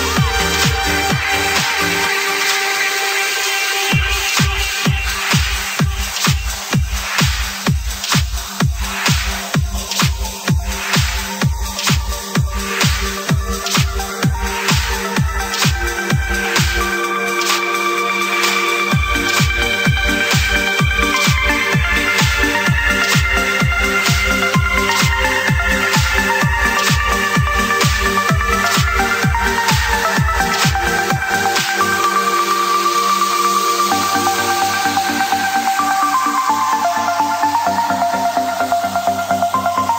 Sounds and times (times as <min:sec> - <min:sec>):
Electronic dance music: 0:00.0 - 0:39.9.